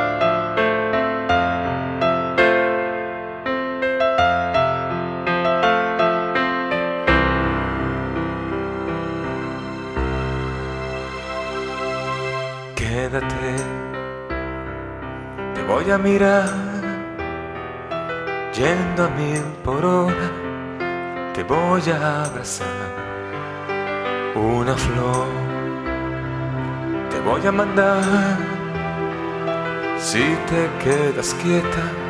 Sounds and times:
Music: 0.0 - 32.0.

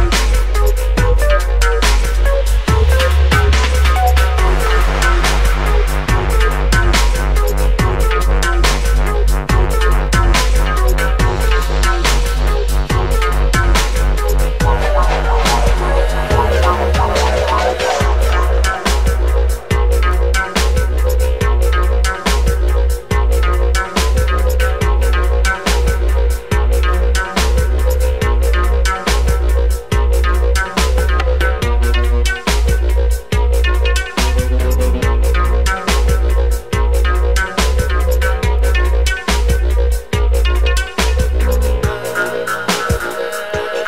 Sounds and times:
Drum and bass: 0.0 - 43.8.

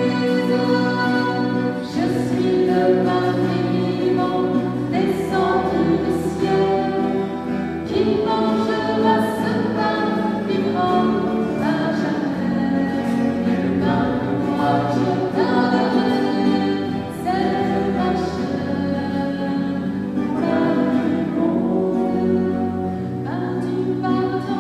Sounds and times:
Gospel music: 0.0 - 24.6
Singing: 0.0 - 24.6.

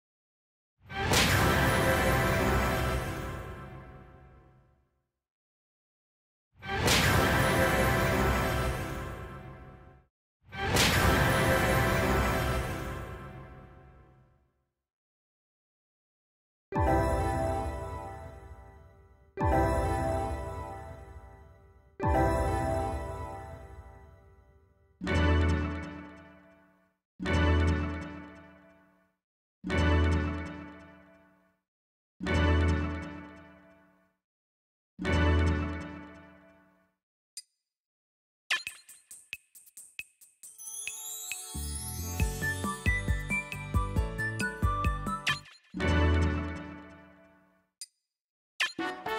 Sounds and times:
Music: 1.0 - 5.0, 6.8 - 14.5, 16.8 - 31.6, 32.3 - 34.2, 35.0 - 37.0, 39.1 - 47.7, 48.7 - 49.1.

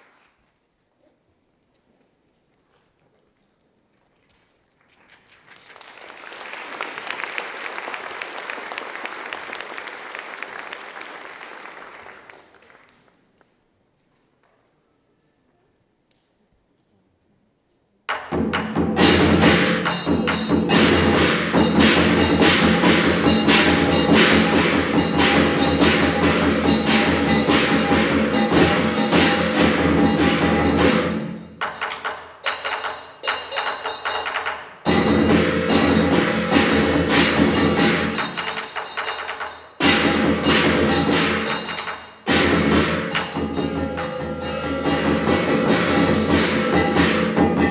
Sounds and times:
Drum: 18.1 - 47.7
Wood block: 18.1 - 47.7.

